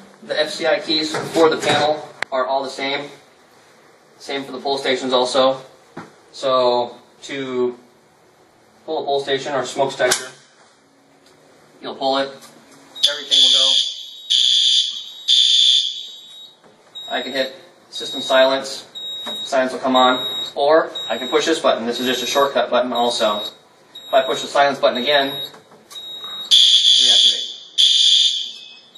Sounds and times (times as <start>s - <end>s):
Speech: 0.2s - 3.2s, 4.2s - 5.7s, 6.4s - 7.8s, 8.8s - 10.4s, 11.8s - 12.4s, 13.0s - 13.8s, 17.0s - 25.5s, 26.9s - 27.4s
Fire alarm: 13.0s - 22.3s, 23.0s - 28.9s.